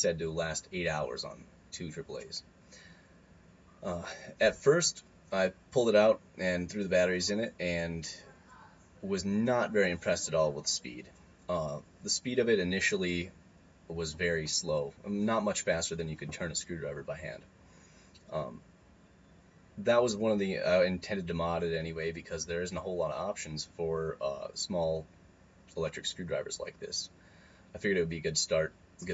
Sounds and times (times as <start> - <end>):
Speech: 0.0 - 2.5, 3.8 - 13.3, 13.9 - 17.5, 18.2 - 18.6, 19.8 - 25.1, 25.7 - 27.1, 27.8 - 29.1.